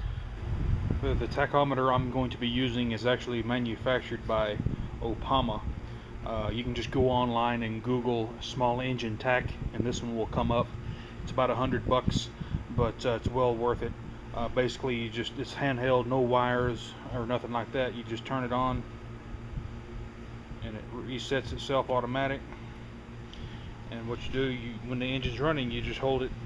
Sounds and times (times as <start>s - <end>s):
Speech: 1.0s - 10.7s, 11.3s - 18.9s, 20.6s - 22.5s, 23.9s - 26.4s.